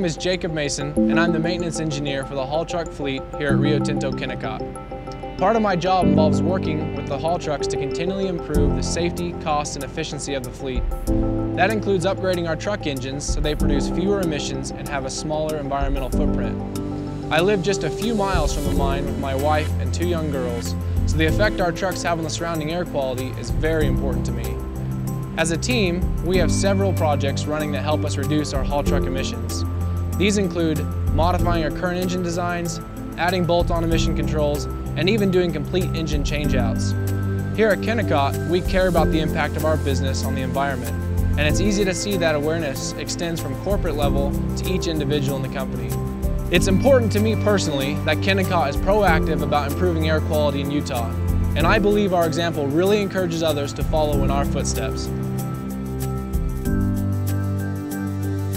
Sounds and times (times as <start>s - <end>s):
Speech: 0.0s - 4.6s, 5.4s - 10.8s, 11.6s - 16.6s, 17.3s - 24.6s, 25.4s - 29.6s, 30.2s - 36.9s, 37.6s - 55.1s
Music: 0.0s - 58.5s.